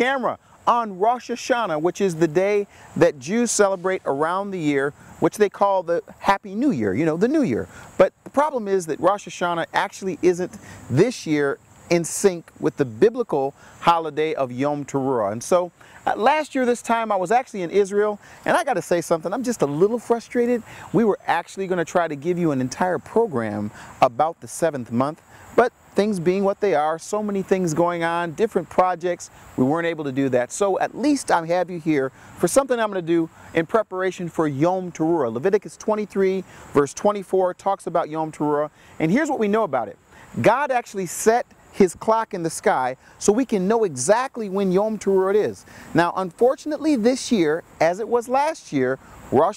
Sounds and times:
Speech: 0.0s - 49.5s.

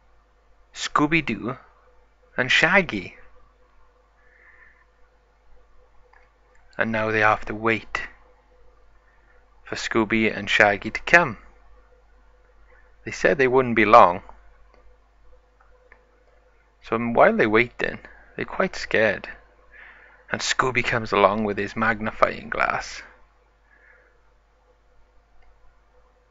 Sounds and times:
Speech: 0.8s - 1.7s, 2.4s - 3.3s, 6.8s - 8.2s, 9.7s - 11.5s, 13.0s - 14.3s, 16.8s - 19.4s, 20.3s - 23.2s.

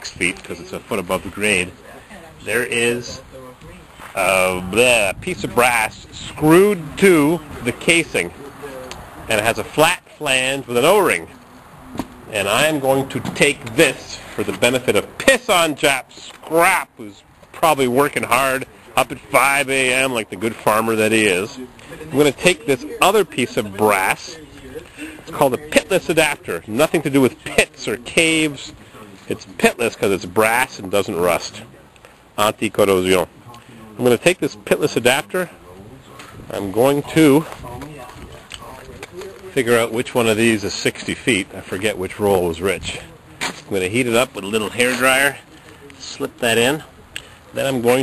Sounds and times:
Speech: 0.0s - 11.3s, 12.3s - 48.0s.

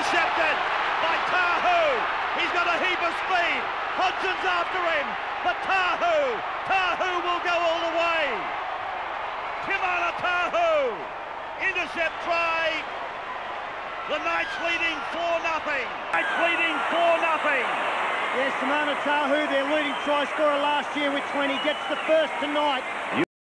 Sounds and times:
Speech: 0.0s - 8.4s, 9.6s - 11.0s, 11.6s - 12.8s, 14.1s - 17.7s, 18.3s - 23.3s.

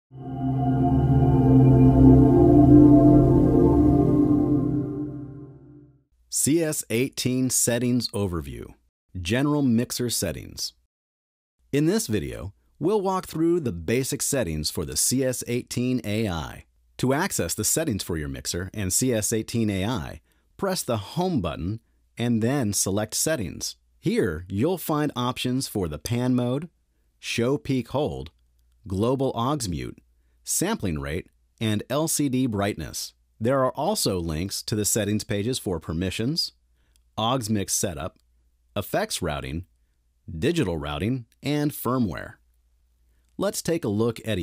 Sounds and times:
Music: 0.1s - 6.0s
Speech: 6.3s - 10.9s, 11.7s - 36.6s, 37.2s - 38.2s, 38.8s - 39.7s, 40.3s - 42.4s, 43.4s - 44.4s.

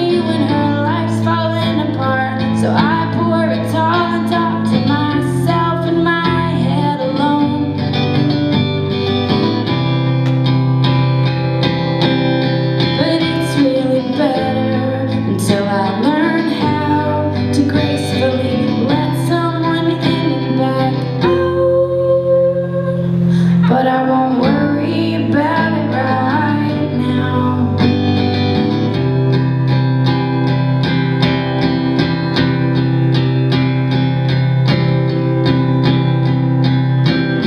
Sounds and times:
Music: 0.0s - 37.4s.

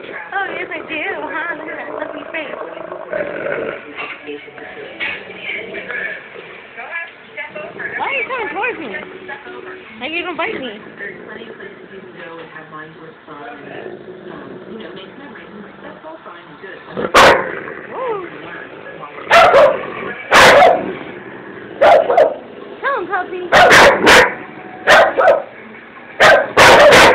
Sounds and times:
Speech: 6.8s - 17.0s
Yip: 19.3s - 20.8s, 21.8s - 22.4s, 23.6s - 25.5s, 26.2s - 27.1s.

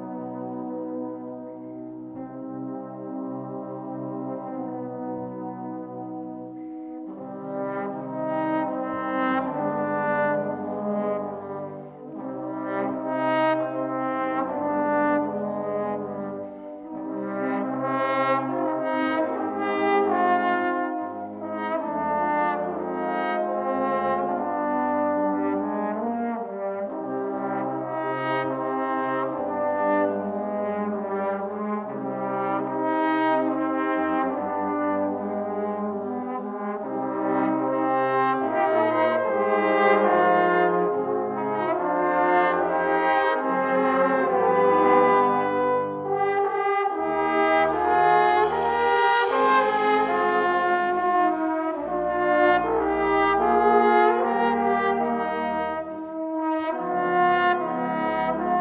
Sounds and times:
Trombone: 0.0s - 58.6s.

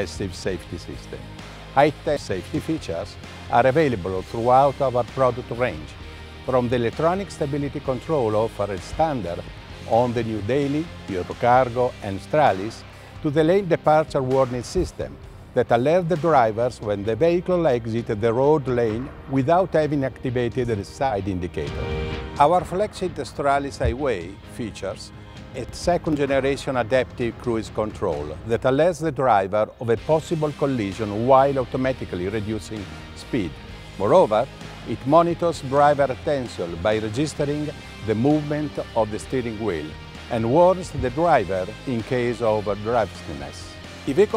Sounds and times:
Speech: 0.0s - 21.8s, 22.4s - 44.3s
Music: 0.0s - 44.3s.

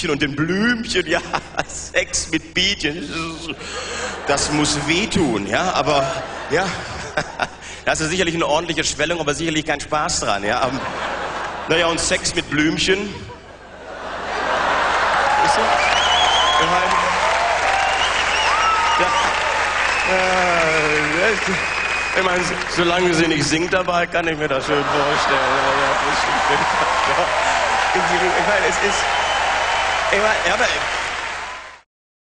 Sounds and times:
Speech: 0.0s - 3.6s, 4.3s - 6.8s, 7.9s - 10.8s, 11.7s - 13.3s, 16.6s - 17.1s, 20.1s - 21.6s, 22.2s - 26.4s, 28.0s - 29.0s, 30.1s - 30.8s.

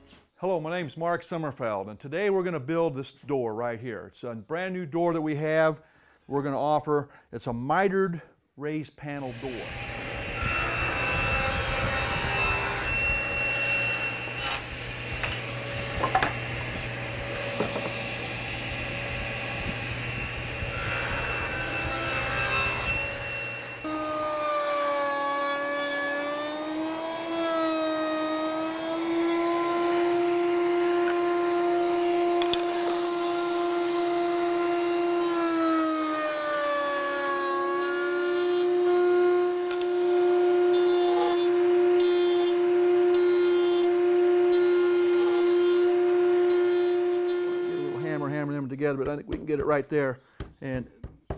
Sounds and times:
Sawing: 9.2s - 48.6s
Wood: 14.4s - 18.2s, 31.0s - 33.2s, 39.6s - 40.0s.

